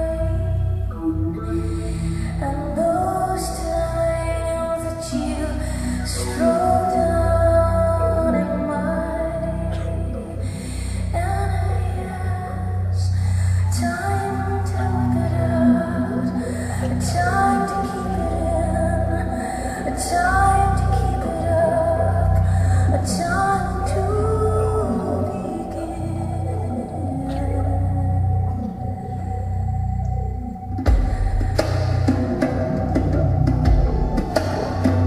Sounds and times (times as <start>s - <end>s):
Music: 0.0s - 35.0s.